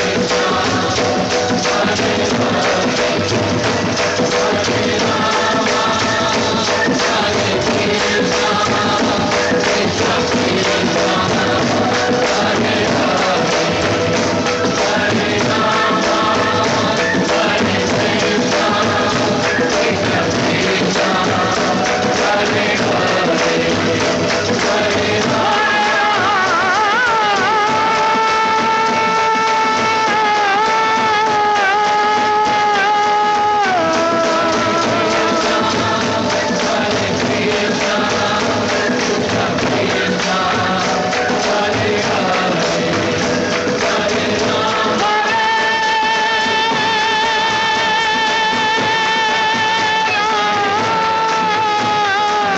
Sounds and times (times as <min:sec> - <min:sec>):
Music: 0:00.0 - 0:52.5.